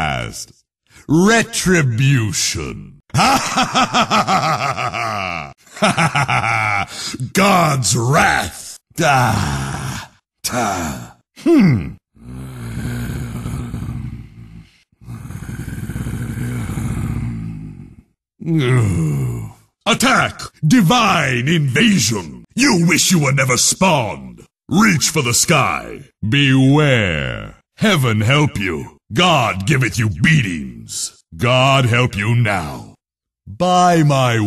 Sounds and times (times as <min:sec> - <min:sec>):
Speech: 0:00.0 - 0:03.4, 0:07.0 - 0:12.0, 0:18.4 - 0:34.4.